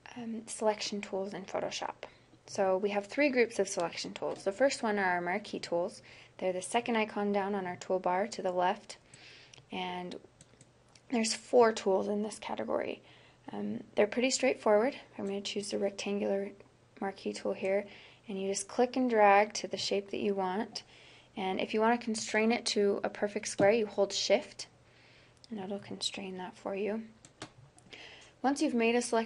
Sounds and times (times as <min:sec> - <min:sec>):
Speech: 0:00.0 - 0:09.0, 0:09.7 - 0:10.3, 0:11.1 - 0:24.8, 0:25.5 - 0:27.2, 0:28.4 - 0:29.2.